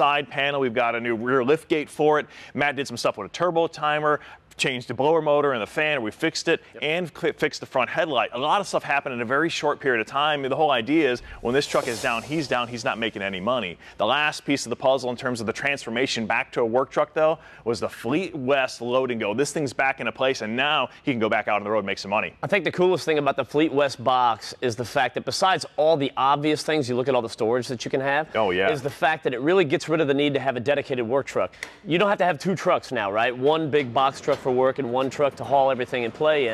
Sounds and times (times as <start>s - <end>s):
Speech: 0.0s - 36.5s.